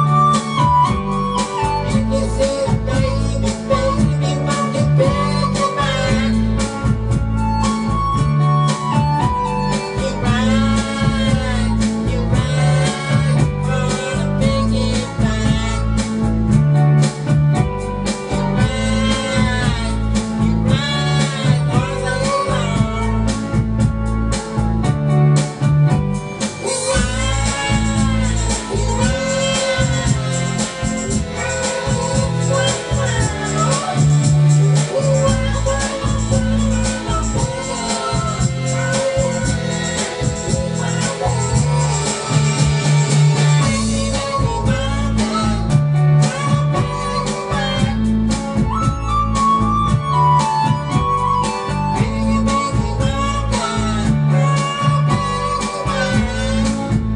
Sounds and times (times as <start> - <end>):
Music: 0.0 - 57.1.